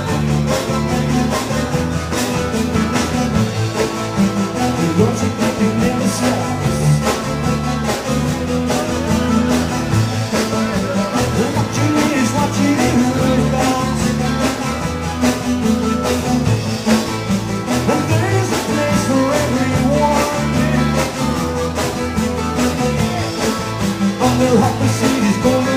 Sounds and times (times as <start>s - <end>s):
Drum: 0.0s - 25.7s
Guitar: 0.0s - 25.7s
Singing: 4.8s - 15.0s, 22.6s - 25.7s.